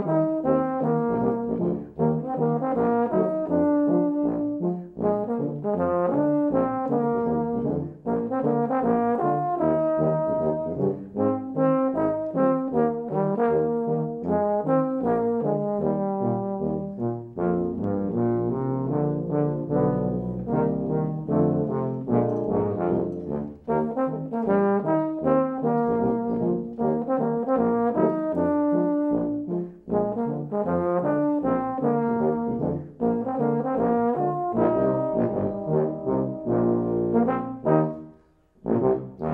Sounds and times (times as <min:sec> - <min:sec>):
Foghorn: 0:00.0 - 0:39.3
French horn: 0:00.0 - 0:39.3
Jazz: 0:00.0 - 0:39.3
Orchestra: 0:00.0 - 0:39.3
Trombone: 0:00.0 - 0:39.3
Trumpet: 0:00.0 - 0:39.3.